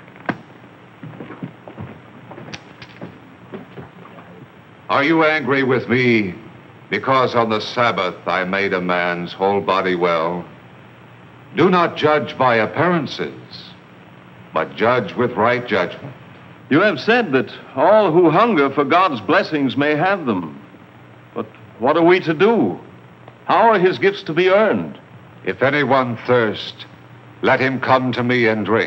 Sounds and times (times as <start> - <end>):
Speech: 4.1 - 10.5, 11.5 - 13.8, 14.6 - 20.7, 21.4 - 22.9, 23.5 - 28.8.